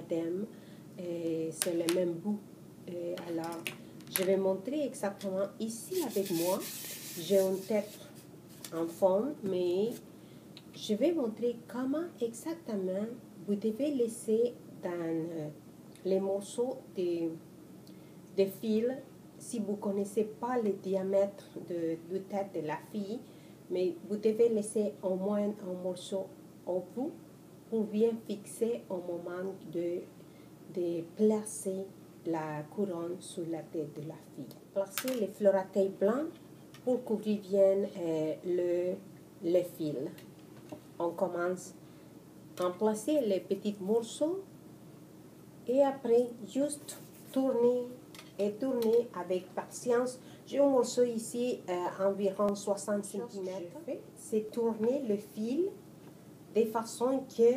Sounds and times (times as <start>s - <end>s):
Speech: 0.0s - 8.1s, 8.7s - 10.1s, 10.7s - 17.4s, 18.4s - 30.1s, 30.7s - 40.3s, 41.0s - 41.8s, 42.6s - 44.5s, 45.7s - 55.8s, 56.6s - 57.5s.